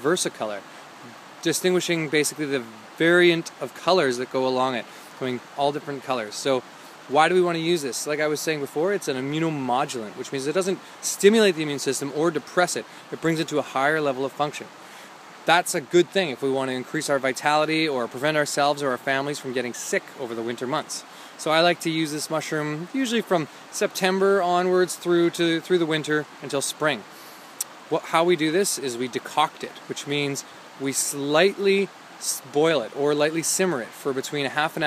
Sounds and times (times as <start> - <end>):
Speech: 0.0 - 14.7, 15.4 - 27.1, 27.9 - 34.8.